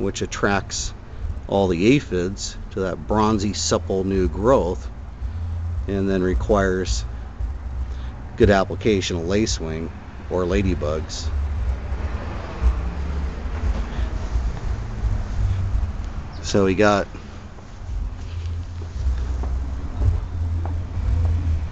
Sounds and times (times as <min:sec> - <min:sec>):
Speech: 0:00.0 - 0:04.9, 0:05.9 - 0:07.1, 0:08.4 - 0:11.3, 0:16.4 - 0:17.1
Outside, urban or manmade: 0:00.0 - 0:21.7.